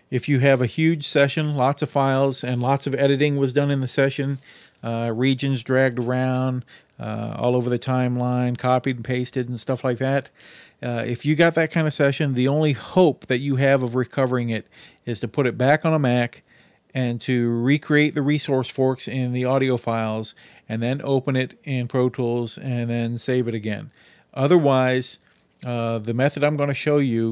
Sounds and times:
Speech: 0.1s - 16.4s, 17.0s - 27.3s.

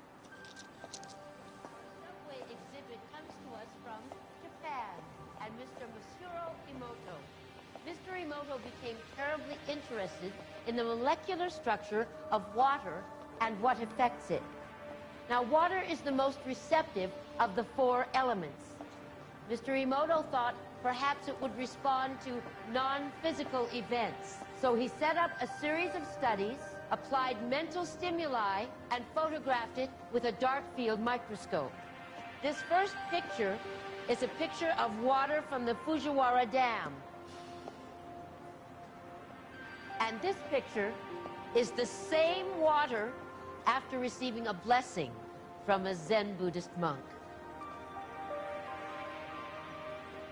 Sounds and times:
Music: 0.0s - 50.3s
Female speech, woman speaking: 2.0s - 7.3s, 7.9s - 14.4s, 15.3s - 18.6s, 19.5s - 31.8s, 32.4s - 37.0s, 40.0s - 41.0s, 41.6s - 47.1s.

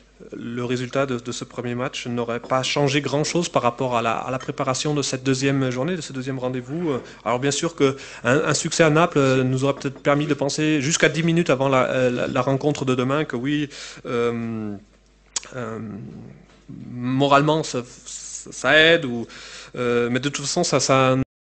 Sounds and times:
Speech: 0.2s - 21.3s.

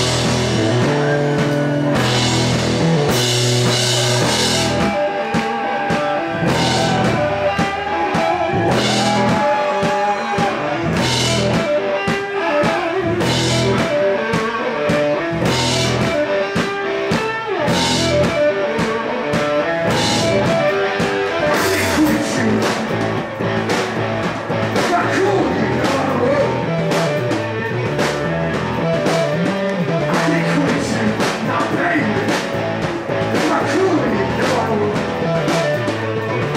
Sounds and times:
Music: 0.0s - 36.5s.

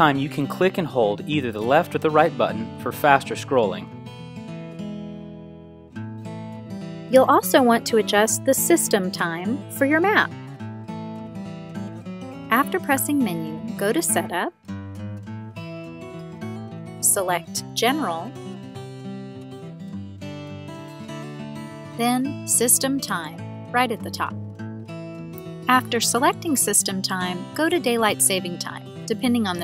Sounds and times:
Speech: 0.0s - 3.9s, 7.1s - 10.3s, 12.5s - 14.5s, 17.0s - 18.3s, 22.0s - 24.3s, 25.7s - 29.6s
Music: 0.0s - 29.6s.

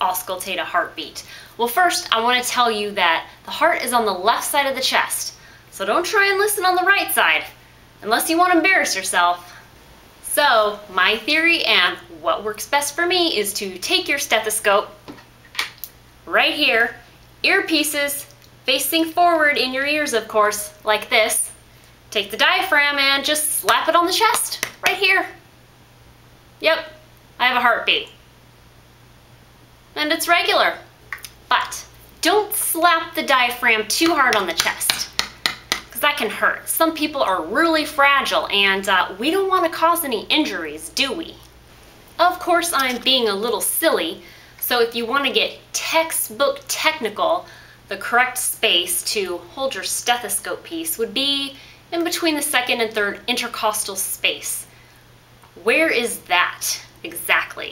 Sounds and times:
Speech: 0.0s - 9.6s, 10.2s - 15.0s, 16.3s - 21.6s, 22.2s - 25.4s, 26.6s - 28.2s, 30.0s - 30.9s, 31.5s - 35.1s, 36.0s - 41.5s, 42.2s - 54.7s, 55.6s - 57.7s.

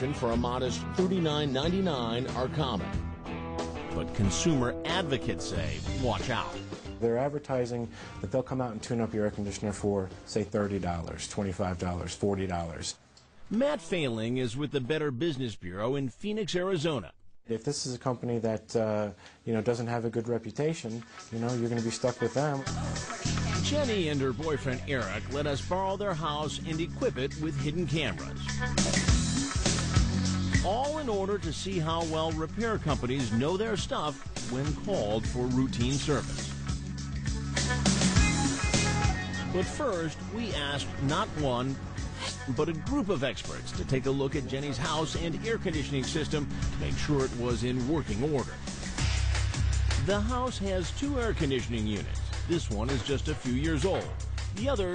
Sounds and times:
Speech: 0.0s - 2.9s, 3.9s - 22.7s, 23.6s - 28.5s, 30.6s - 36.5s, 39.6s - 41.8s, 42.4s - 48.6s, 50.0s - 54.9s
Music: 0.0s - 12.6s, 13.5s - 15.0s, 19.7s - 54.9s.

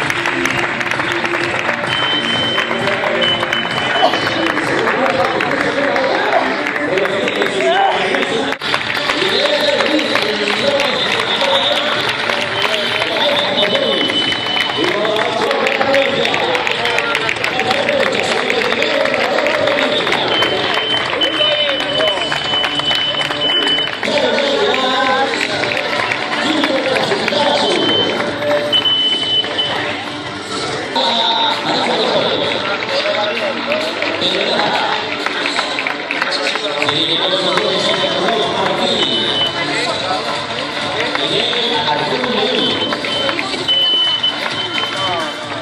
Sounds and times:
Music: 0.0s - 45.6s
Outside, urban or manmade: 0.0s - 45.6s
Speech: 4.0s - 22.3s, 24.0s - 28.6s, 30.6s - 45.6s.

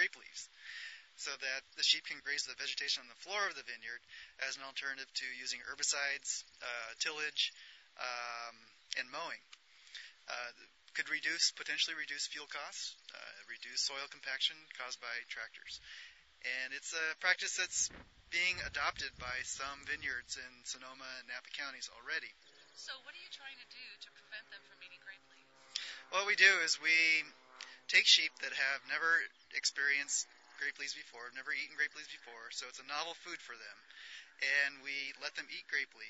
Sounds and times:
Speech: 0.0s - 9.4s, 10.0s - 36.0s.

